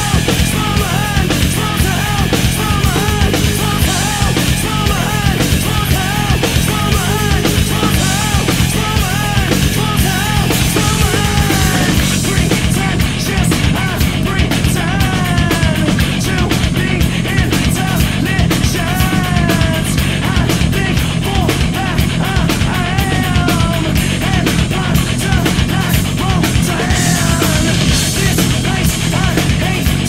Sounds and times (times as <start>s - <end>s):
Music: 0.0s - 30.0s.